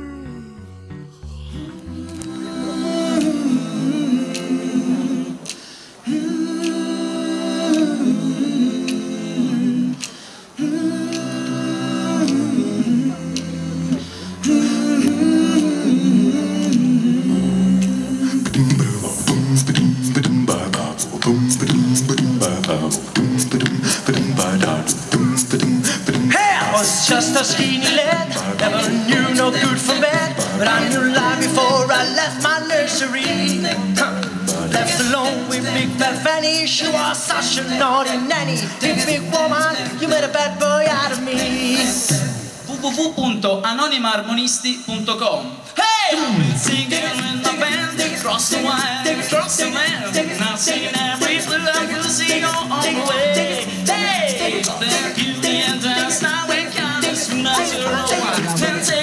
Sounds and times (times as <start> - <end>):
Dance music: 14.1 - 42.7, 45.9 - 59.0.